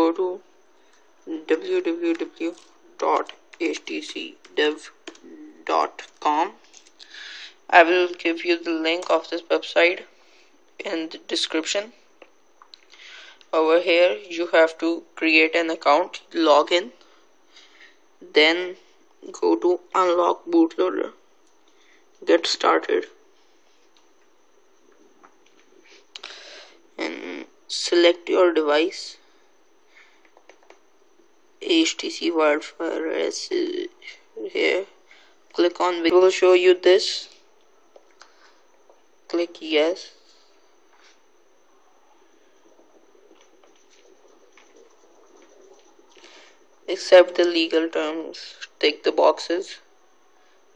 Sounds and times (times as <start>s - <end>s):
Speech: 0.0s - 0.5s, 1.3s - 6.7s, 7.7s - 10.1s, 10.8s - 12.0s, 13.5s - 17.0s, 18.2s - 21.2s, 22.2s - 23.2s, 27.0s - 29.3s, 31.6s - 37.4s, 39.3s - 40.2s, 46.9s - 49.9s.